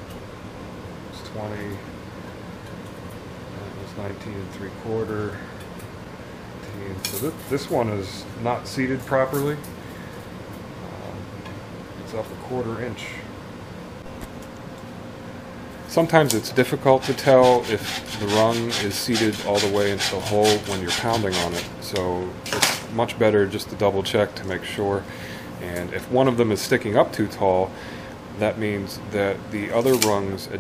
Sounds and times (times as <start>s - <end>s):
Speech: 1.1s - 1.9s, 3.6s - 5.5s, 6.7s - 9.7s, 10.8s - 11.3s, 12.0s - 13.3s, 15.9s - 27.7s, 28.4s - 30.6s.